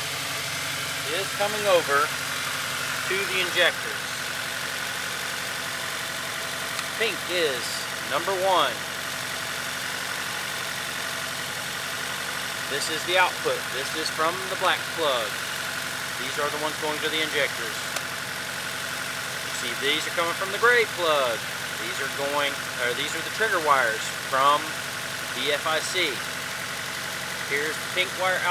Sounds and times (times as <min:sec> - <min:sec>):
Speech: 0:01.1 - 0:02.1, 0:03.1 - 0:04.2, 0:07.0 - 0:08.8, 0:12.7 - 0:15.4, 0:16.2 - 0:17.9, 0:19.6 - 0:24.8, 0:25.4 - 0:26.2, 0:27.5 - 0:28.5.